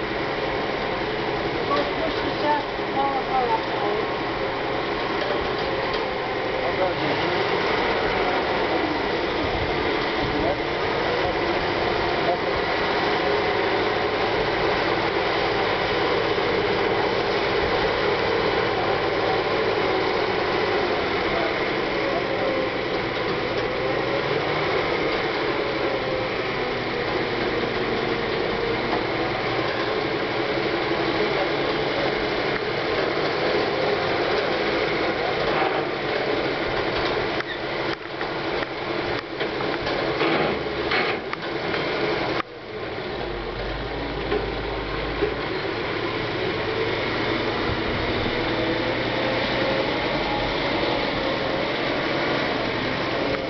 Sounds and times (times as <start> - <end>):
Truck: 0.0 - 53.4.